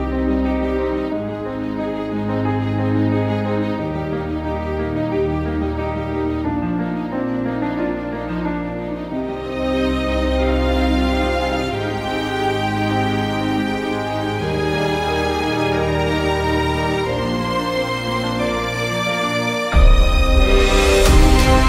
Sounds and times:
Music: 0.0 - 21.6.

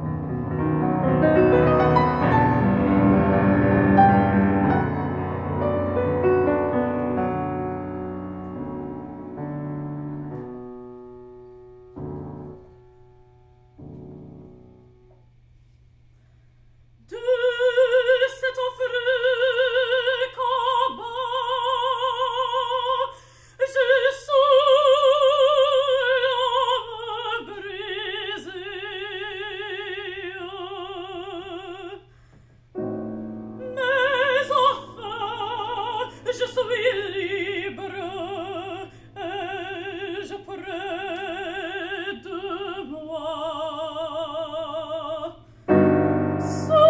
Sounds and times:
Piano: 0.0 - 16.0, 17.1 - 46.8
Opera: 0.6 - 10.7, 17.1 - 32.1, 32.8 - 46.8.

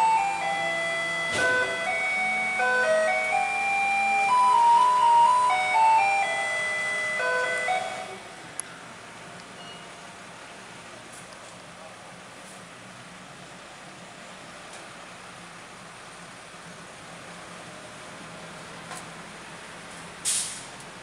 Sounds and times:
Vehicle: 0.0 - 21.0.

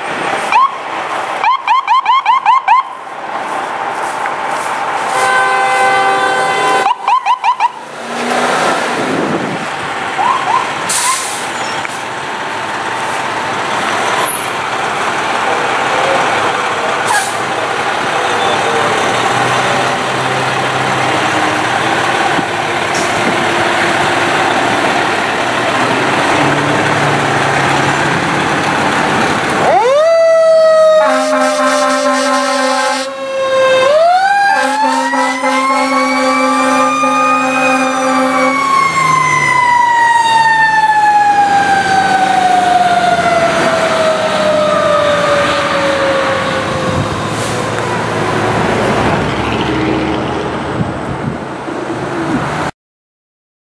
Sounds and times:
Fire engine, fire truck (siren): 0.0 - 3.5, 4.9 - 51.4.

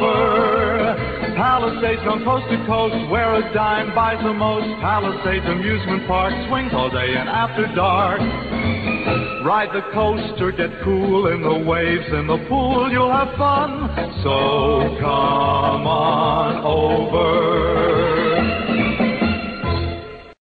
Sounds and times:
Music: 0.0 - 20.4.

